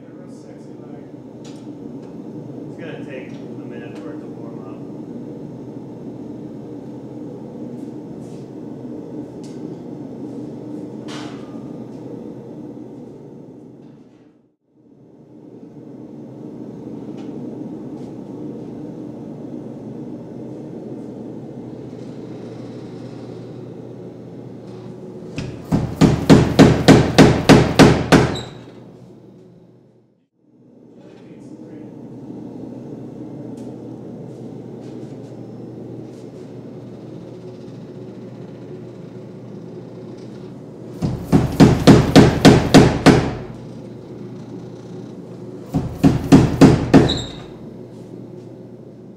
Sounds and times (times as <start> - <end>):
Hammer: 25.4 - 28.5, 41.0 - 43.4, 45.8 - 47.4.